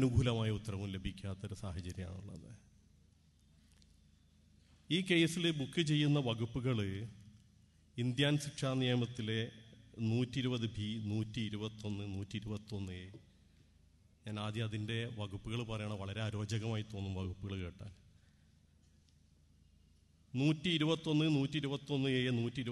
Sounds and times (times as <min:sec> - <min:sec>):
Male speech, man speaking: 0:00.0 - 0:02.6, 0:04.9 - 0:07.2, 0:08.0 - 0:13.2, 0:14.3 - 0:18.0, 0:20.4 - 0:22.7
Narration, monologue: 0:00.0 - 0:22.7.